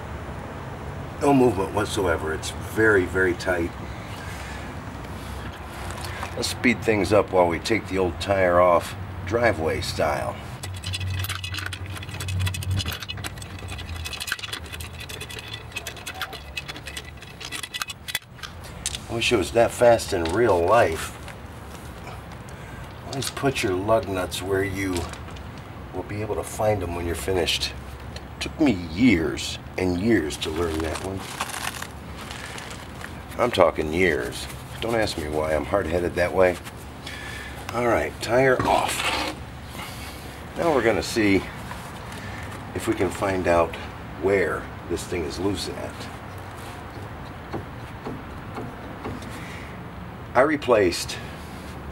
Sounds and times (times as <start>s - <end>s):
Speech: 1.2s - 3.7s, 6.4s - 10.4s, 19.1s - 21.1s, 23.0s - 25.1s, 25.9s - 27.8s, 28.4s - 31.3s, 33.4s - 36.6s, 37.7s - 39.2s, 40.6s - 41.5s, 42.8s - 46.1s, 50.4s - 51.3s.